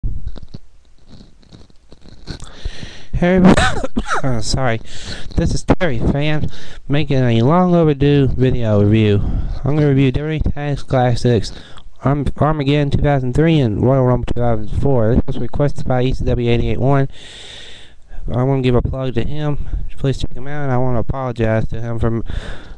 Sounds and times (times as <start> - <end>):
Speech: 3.1 - 17.1, 18.2 - 22.3.